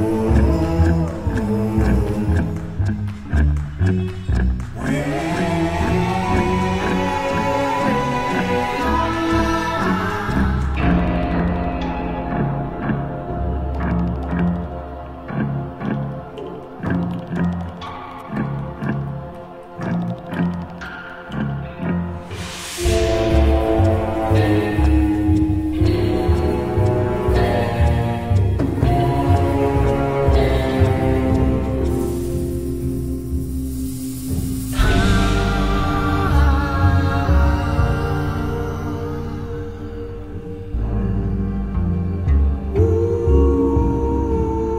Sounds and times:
Music: 0.0s - 44.7s.

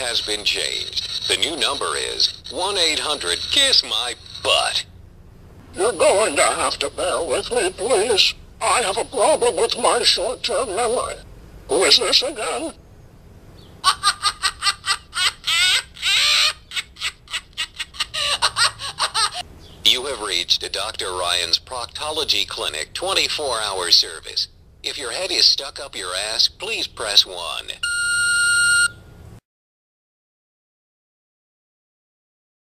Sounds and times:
Speech: 0.0s - 4.9s, 5.8s - 12.8s, 19.9s - 27.8s.

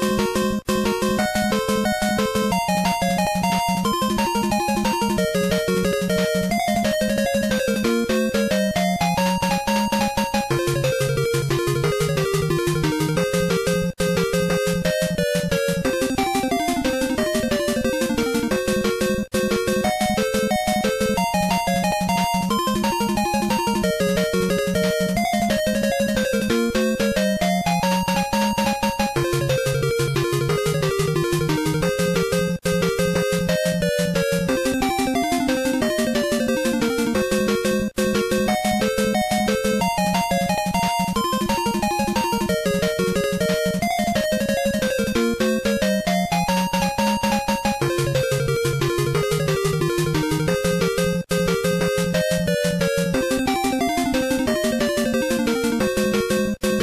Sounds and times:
Video game music: 0.0s - 56.8s.

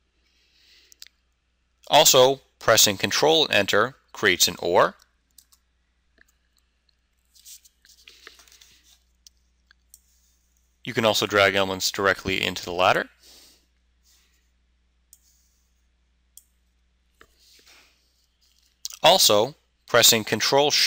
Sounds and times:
Inside, small room: 0.0s - 20.8s
Speech: 1.9s - 5.0s, 10.9s - 13.2s, 18.9s - 20.8s.

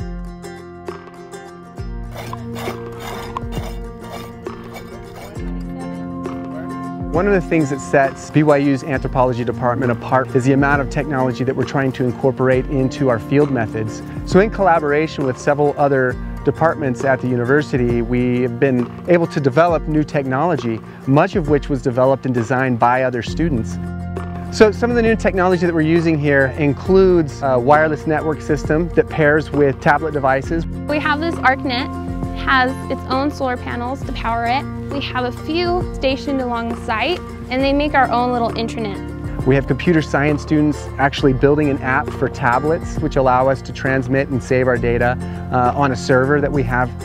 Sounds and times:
Music: 0.0s - 47.0s.

